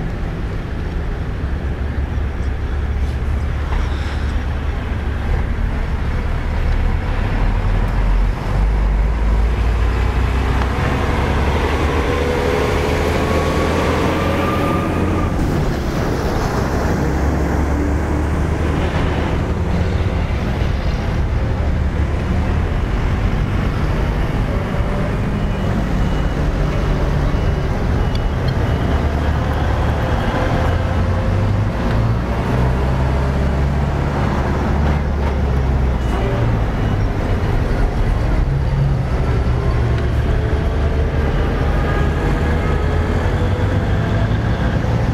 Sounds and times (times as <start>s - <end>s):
Car: 0.0s - 45.1s
Truck: 0.0s - 45.1s.